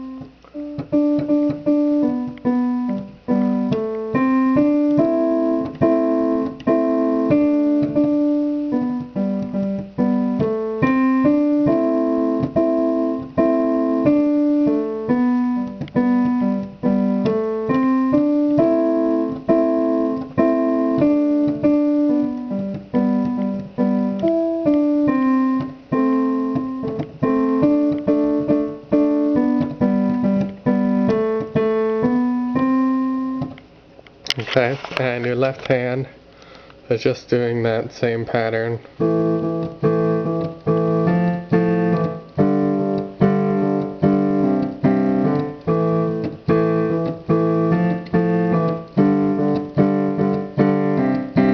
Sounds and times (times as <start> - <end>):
Piano: 0.0 - 51.5.